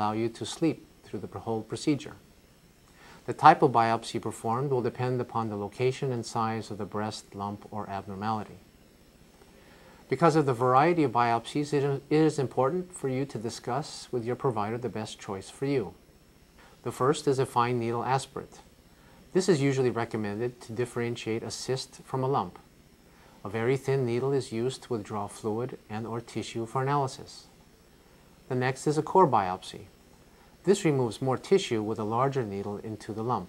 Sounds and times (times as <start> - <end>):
Speech: 0.0 - 2.3, 3.3 - 8.7, 10.1 - 16.0, 16.8 - 18.7, 19.3 - 22.7, 23.4 - 27.6, 28.5 - 29.9, 30.6 - 33.4.